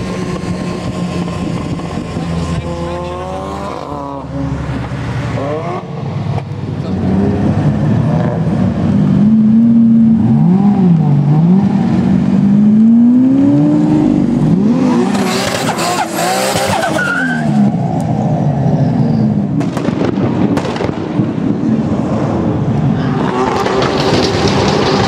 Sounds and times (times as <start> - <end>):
Race car, auto racing: 0.0 - 25.0
Skidding: 0.0 - 25.0
Tire squeal: 15.6 - 18.0.